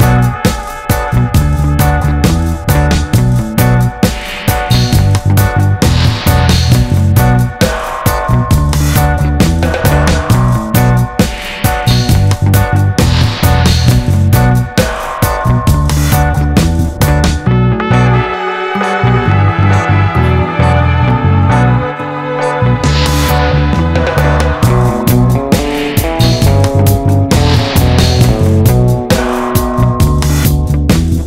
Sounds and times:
Music: 0.0 - 31.2.

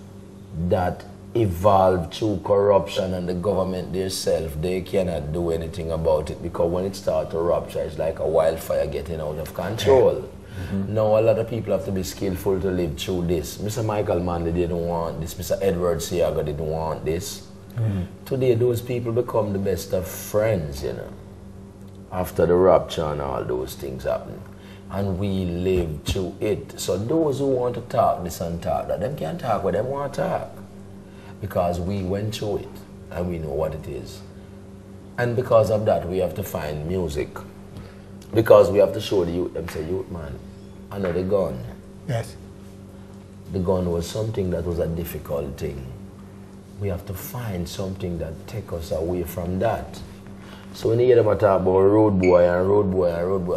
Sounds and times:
Speech: 0.5 - 21.2, 22.1 - 30.6, 31.4 - 34.3, 35.2 - 37.5, 38.3 - 42.4, 43.5 - 46.0, 46.8 - 50.1, 50.8 - 53.5.

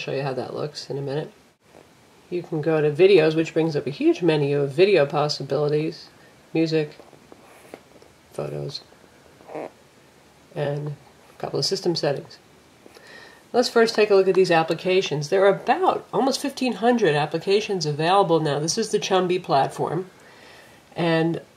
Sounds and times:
Speech: 0.0 - 1.4, 2.3 - 7.0, 8.3 - 8.9, 10.6 - 12.4, 13.5 - 20.1, 21.0 - 21.5
Inside, small room: 0.0 - 21.5.

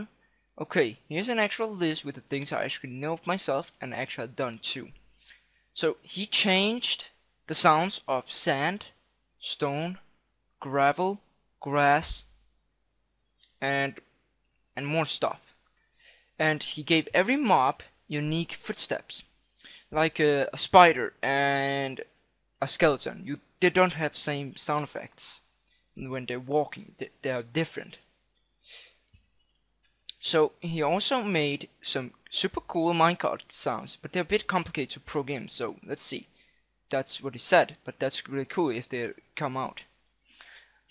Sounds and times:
Speech: 0.0 - 5.0, 5.8 - 12.3, 13.6 - 14.0, 14.8 - 15.5, 16.4 - 19.3, 19.9 - 28.1, 30.1 - 36.3, 36.9 - 39.9.

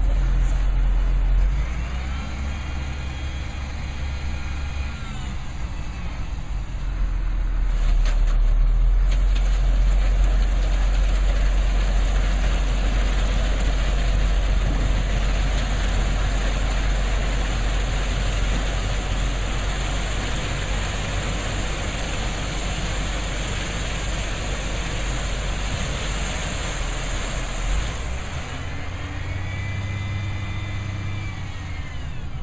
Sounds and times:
Truck: 0.0 - 32.4.

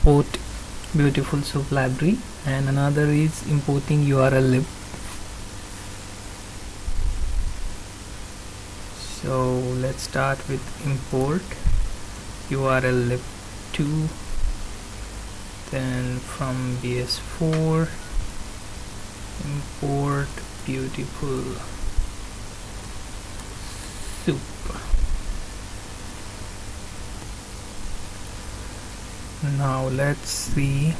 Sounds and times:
Speech: 0.0 - 4.7, 9.0 - 11.6, 12.5 - 14.2, 15.7 - 18.0, 19.4 - 21.8, 24.2 - 24.9, 29.4 - 30.9
Pink noise: 0.0 - 30.9.

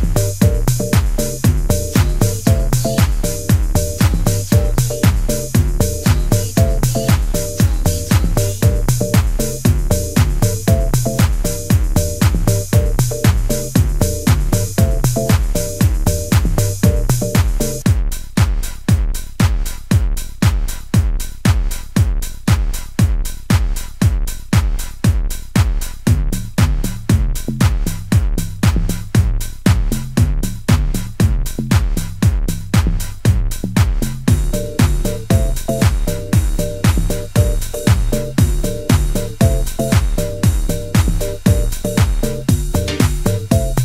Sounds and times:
Trance music: 0.0 - 17.9, 34.3 - 43.8
Electronica: 0.0 - 18.0, 33.2 - 43.8
Techno: 0.0 - 43.8.

